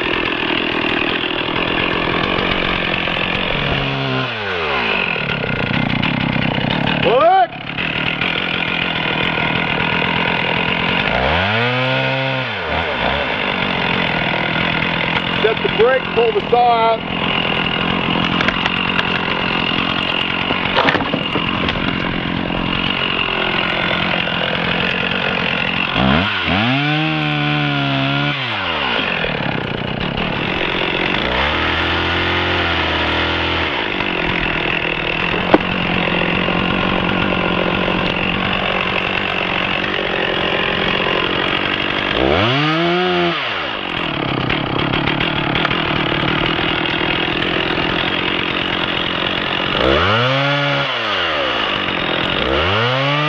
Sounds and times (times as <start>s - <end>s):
Chainsaw: 0.0s - 53.2s.